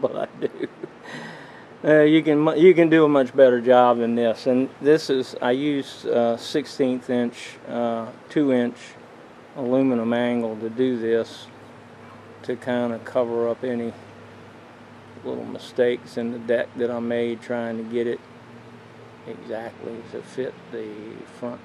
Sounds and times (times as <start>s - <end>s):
Speech: 0.0s - 0.7s, 1.8s - 9.0s, 9.6s - 11.5s, 12.5s - 14.0s, 15.2s - 18.2s, 19.3s - 21.6s.